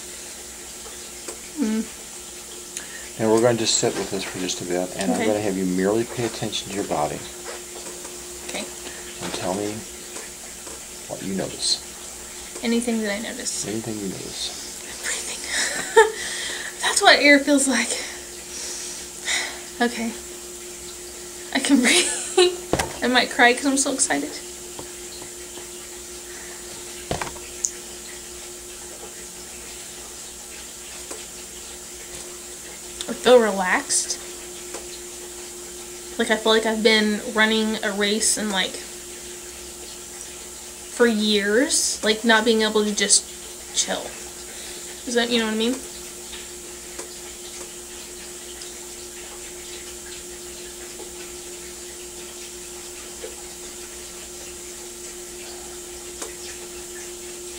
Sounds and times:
Breathing: 2.8s - 3.2s, 16.2s - 16.8s, 44.5s - 44.9s
Speech: 3.2s - 7.3s, 8.5s - 9.8s, 11.1s - 11.8s, 12.6s - 14.7s, 16.8s - 18.1s, 19.8s - 20.2s, 21.6s - 22.0s, 23.0s - 24.4s, 33.0s - 34.2s, 36.2s - 38.8s, 41.0s - 43.2s, 43.8s - 44.2s, 45.1s - 45.8s.

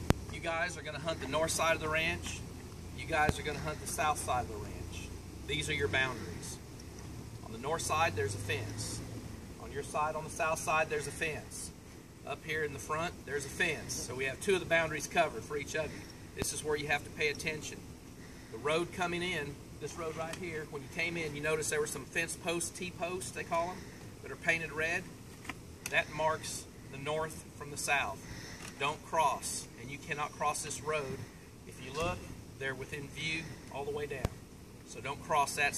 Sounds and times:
Speech: 0.3s - 6.6s, 7.4s - 9.0s, 9.6s - 17.8s, 18.6s - 25.1s, 25.9s - 28.2s, 28.8s - 35.7s.

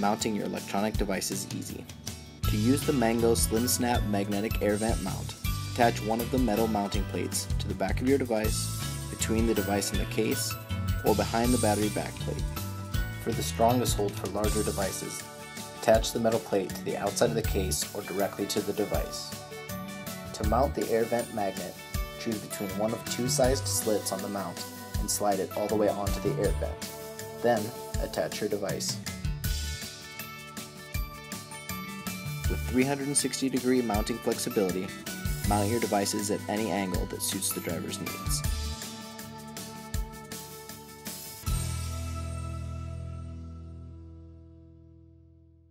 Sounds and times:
Speech: 0.0s - 1.9s, 2.5s - 12.5s, 13.2s - 15.2s, 15.8s - 19.4s, 20.3s - 26.8s, 27.4s - 29.0s, 32.5s - 38.5s
Music: 0.0s - 45.7s.

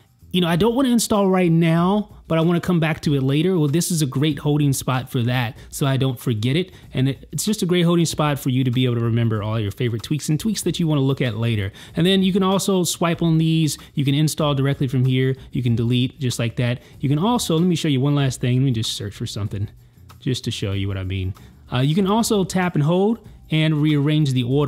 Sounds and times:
Speech: 0.3s - 24.6s.

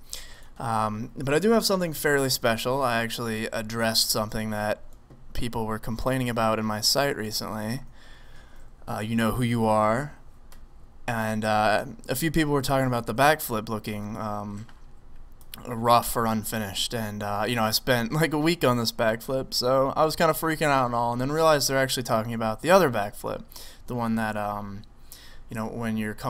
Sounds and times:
Speech: 0.6s - 4.8s, 5.4s - 7.9s, 8.9s - 10.2s, 11.1s - 14.7s, 15.6s - 24.9s, 25.5s - 26.2s.

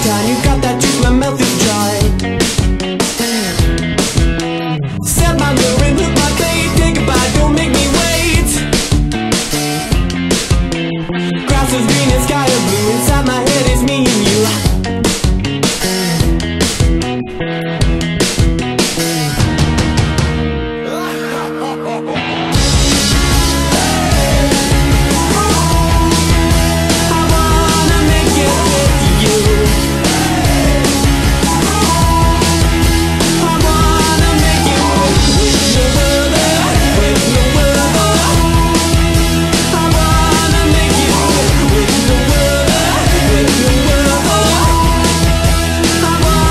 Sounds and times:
Soundtrack music: 0.0s - 46.5s.

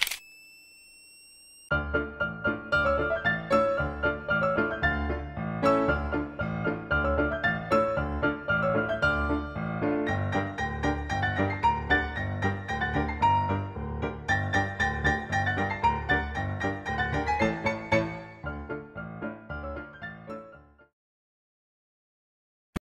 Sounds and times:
Music: 1.7s - 21.0s.

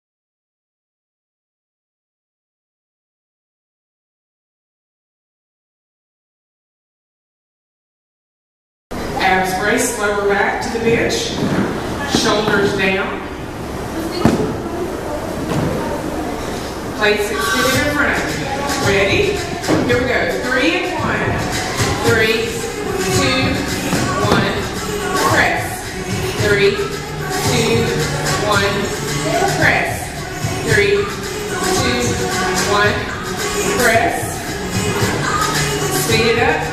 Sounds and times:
Speech: 9.2s - 11.4s, 12.0s - 13.3s, 13.9s - 34.4s, 35.2s - 36.7s
Music: 17.6s - 36.7s.

